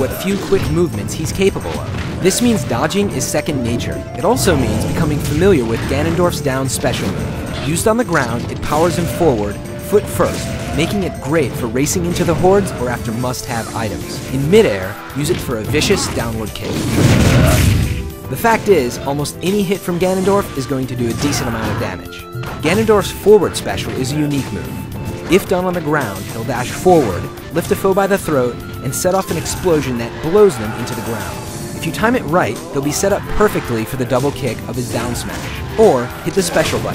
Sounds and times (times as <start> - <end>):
Smash, crash: 0.0 - 14.5, 15.2 - 18.1.